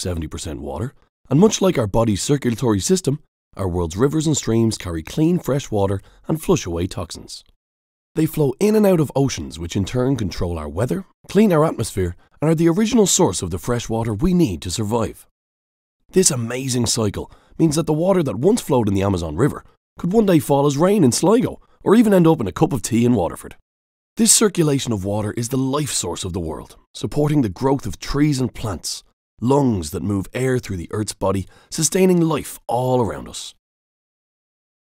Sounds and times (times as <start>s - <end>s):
Speech: 0.0s - 7.5s, 8.2s - 15.3s, 16.1s - 23.6s, 24.2s - 33.6s.